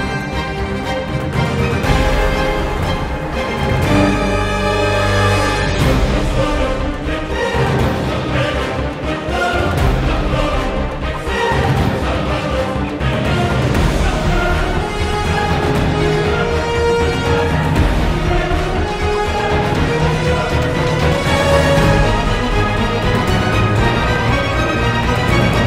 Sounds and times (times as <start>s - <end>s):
Music: 0.0s - 25.6s.